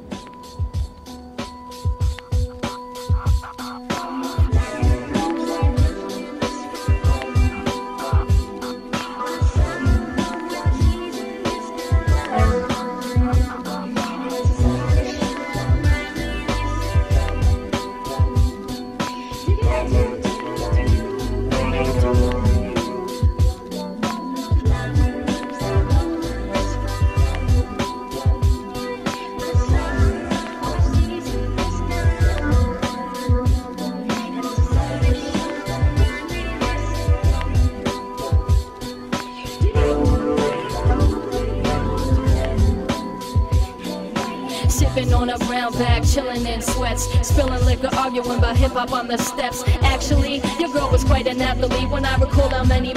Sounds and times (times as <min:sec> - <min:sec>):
Jingle (music): 0:00.0 - 0:52.9.